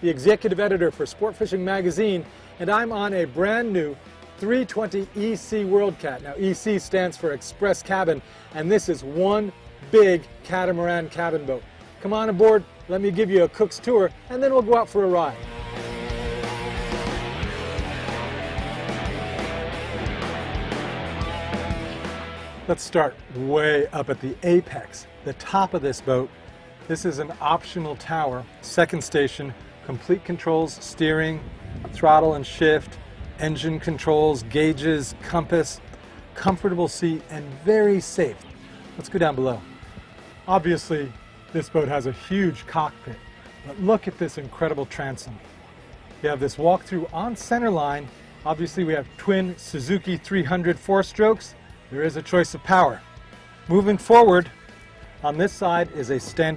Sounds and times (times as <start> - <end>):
Speech: 0.0 - 15.4, 22.7 - 26.3, 26.9 - 31.4, 32.0 - 35.8, 36.4 - 38.4, 39.0 - 39.6, 40.5 - 45.4, 46.2 - 53.0, 53.7 - 54.5, 55.2 - 56.5
Music: 0.0 - 56.5.